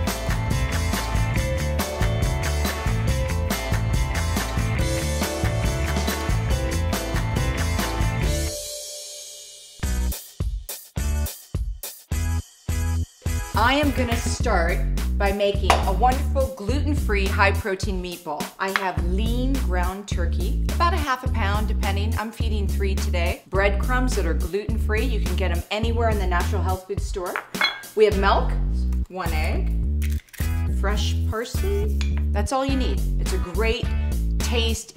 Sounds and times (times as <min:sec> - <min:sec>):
Music: 0:00.0 - 0:34.9
Speech: 0:13.6 - 0:27.4, 0:28.0 - 0:29.7, 0:30.8 - 0:34.9.